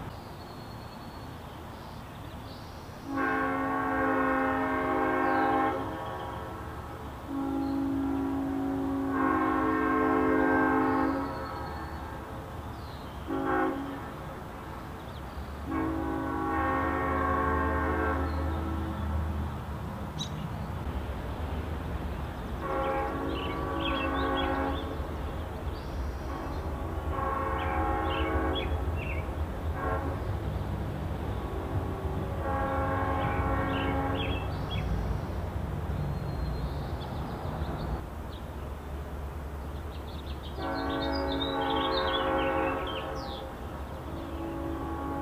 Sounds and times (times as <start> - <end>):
Train horn: 3.1 - 6.6, 7.2 - 12.3, 13.2 - 14.5, 15.6 - 19.4, 22.6 - 25.2, 26.2 - 30.6, 31.3 - 34.9, 40.5 - 45.2.